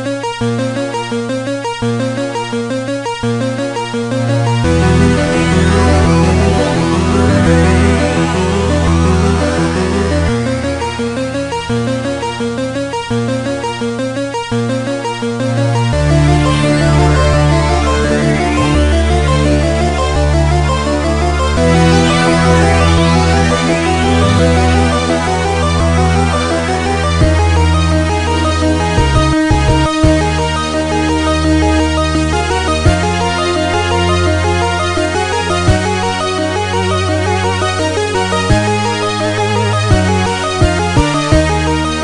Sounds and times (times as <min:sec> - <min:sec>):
Music: 0:00.0 - 0:42.0.